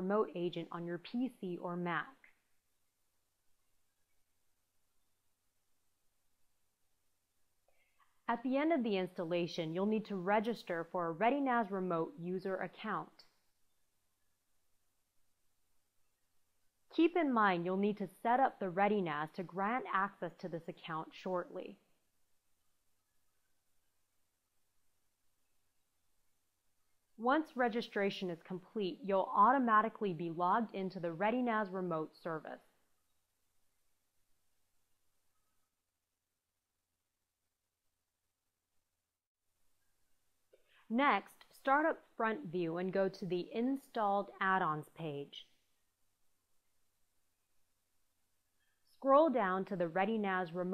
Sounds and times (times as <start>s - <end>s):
Speech: 0.0s - 2.2s, 8.3s - 13.2s, 17.0s - 21.8s, 27.2s - 32.6s, 40.9s - 45.4s, 49.0s - 50.7s
Silence: 2.1s - 8.3s, 13.2s - 16.9s, 21.8s - 27.2s, 32.6s - 41.6s.